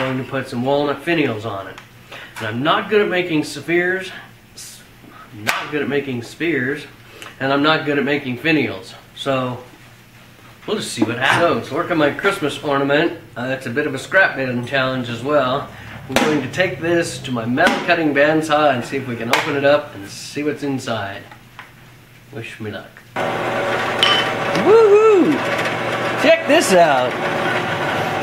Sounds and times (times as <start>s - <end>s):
Speech: 0.0s - 1.8s, 2.4s - 9.7s, 10.6s - 21.3s, 22.3s - 23.0s, 26.2s - 27.2s.